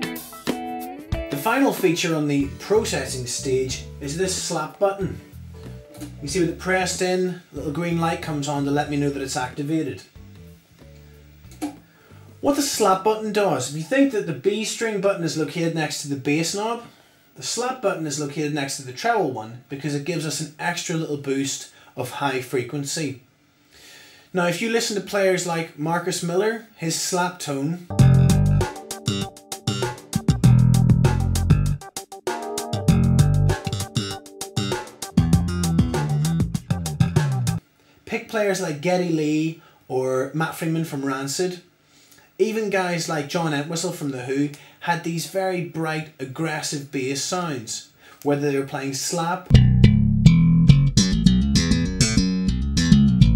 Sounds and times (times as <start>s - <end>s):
Male speech, man speaking: 1.3s - 5.2s, 6.2s - 10.1s, 12.4s - 23.2s, 24.3s - 27.9s, 38.1s - 41.7s, 42.4s - 49.5s
Jazz: 27.9s - 37.6s, 49.5s - 53.3s.